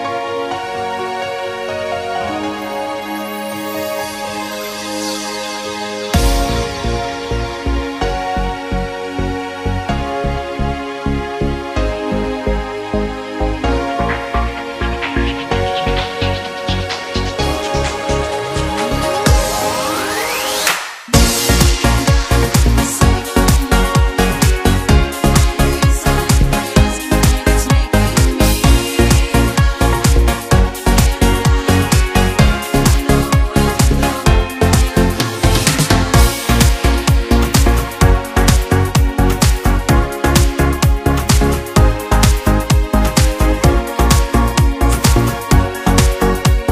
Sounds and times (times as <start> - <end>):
Music: 0.0 - 46.7.